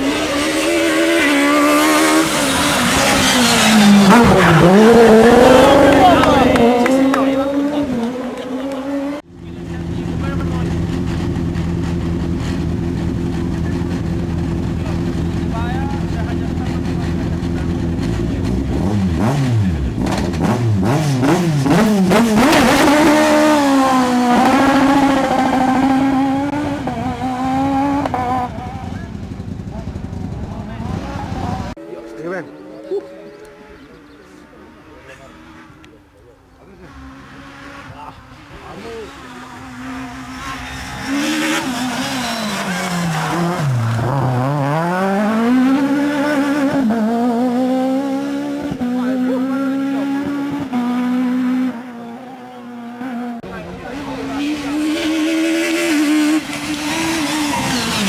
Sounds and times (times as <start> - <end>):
Speech: 14.8 - 18.5, 48.8 - 50.5, 53.4 - 55.0.